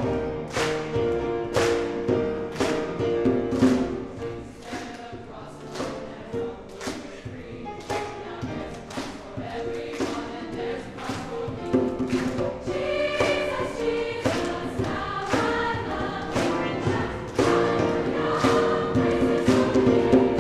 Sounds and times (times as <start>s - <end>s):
Choir: 0.0s - 0.8s, 1.6s - 20.4s.